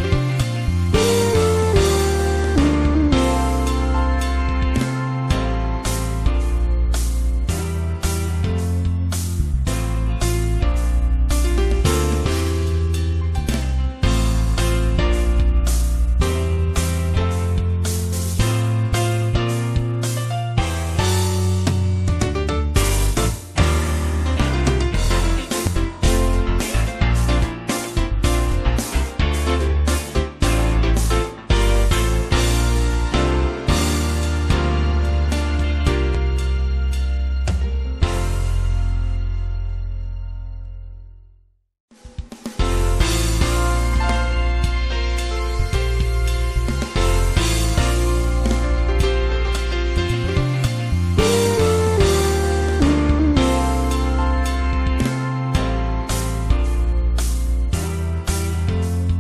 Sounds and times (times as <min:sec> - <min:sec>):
Music: 0:00.0 - 0:59.2.